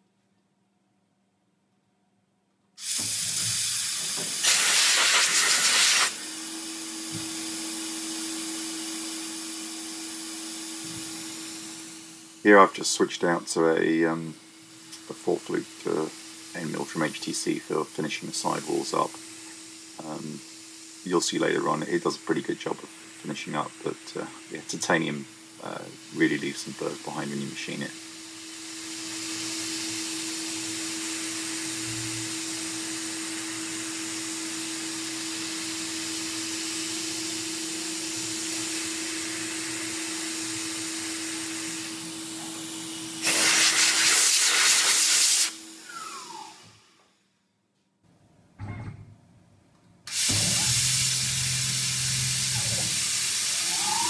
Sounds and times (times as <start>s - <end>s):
Drill: 2.8s - 12.5s, 14.5s - 47.2s, 50.1s - 54.0s.